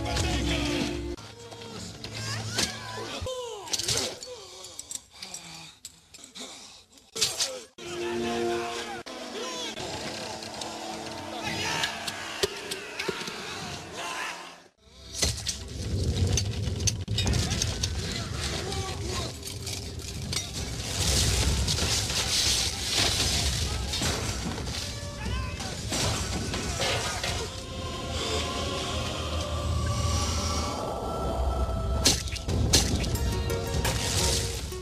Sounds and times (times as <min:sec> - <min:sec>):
Music: 0:00.0 - 0:03.3, 0:07.8 - 0:12.8, 0:27.6 - 0:34.8
Speech: 0:18.2 - 0:19.4, 0:25.0 - 0:25.8.